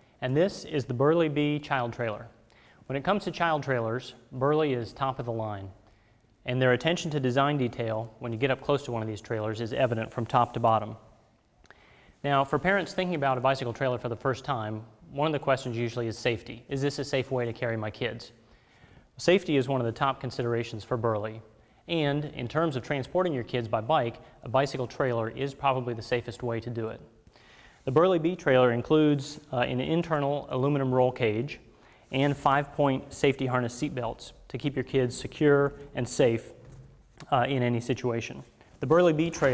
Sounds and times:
Speech: 0.2s - 5.8s, 6.4s - 11.1s, 12.2s - 18.4s, 19.2s - 27.1s, 27.9s - 36.6s, 37.2s - 39.5s.

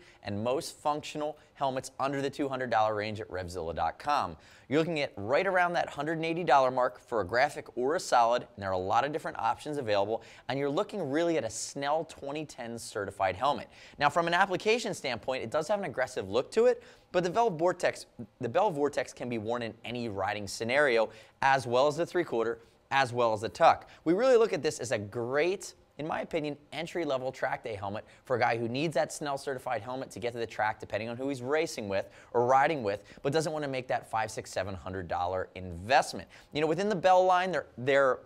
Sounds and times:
Speech: 0.0s - 38.2s.

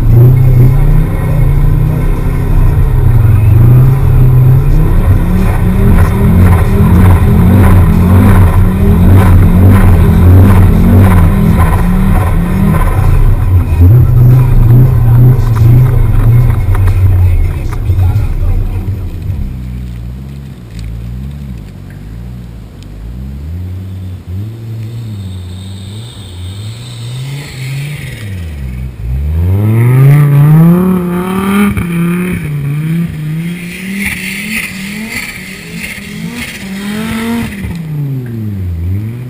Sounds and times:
Accelerating, revving, vroom: 0.0s - 17.0s, 23.1s - 39.2s
Car: 0.0s - 39.2s.

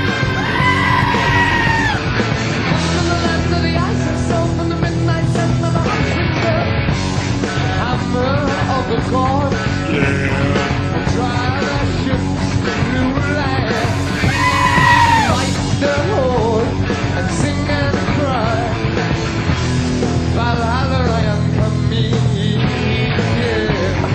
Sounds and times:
Screaming: 0.0s - 2.1s, 13.8s - 15.6s
Music: 0.0s - 24.1s.

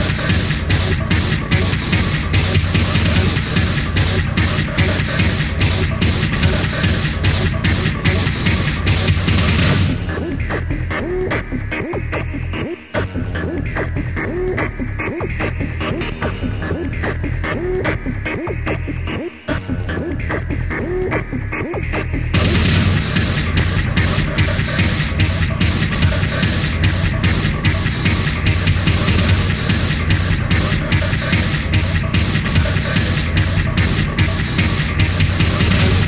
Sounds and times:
Music: 0.0s - 36.0s.

